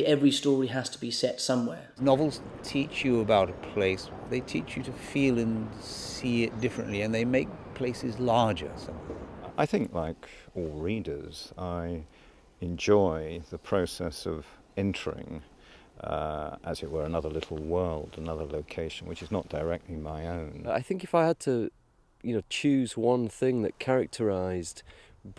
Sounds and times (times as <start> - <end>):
Speech: 0.0 - 25.3.